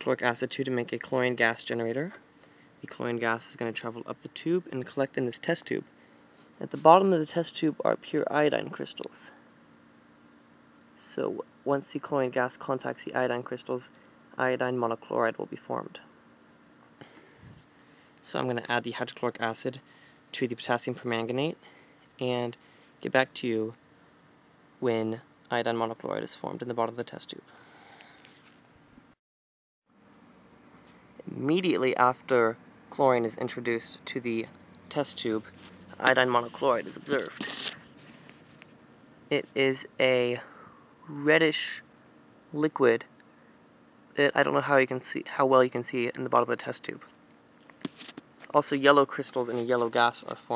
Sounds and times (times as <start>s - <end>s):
Speech: 0.0s - 2.2s, 2.8s - 5.9s, 6.6s - 9.4s, 11.0s - 16.1s, 18.2s - 21.6s, 22.2s - 23.8s, 24.8s - 27.5s, 31.2s - 37.7s, 39.3s - 40.5s, 41.1s - 41.8s, 42.5s - 43.1s, 44.2s - 47.1s, 48.5s - 50.5s.